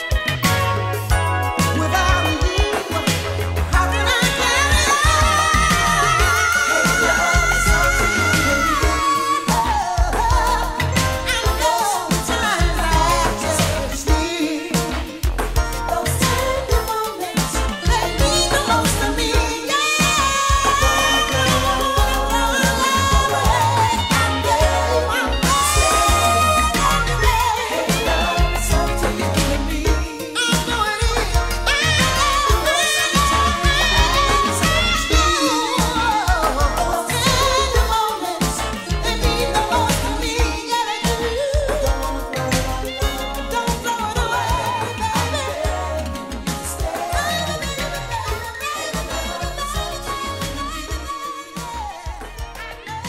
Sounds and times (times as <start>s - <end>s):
Music: 0.0s - 53.0s.